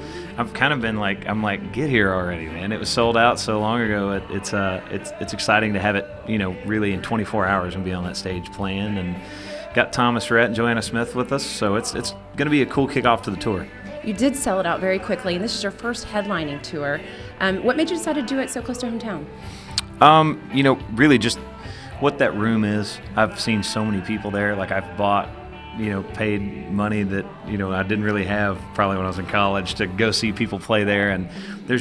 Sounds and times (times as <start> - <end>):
Music: 0.0 - 31.8
Speech: 0.2 - 19.2, 20.0 - 21.4, 22.0 - 31.8.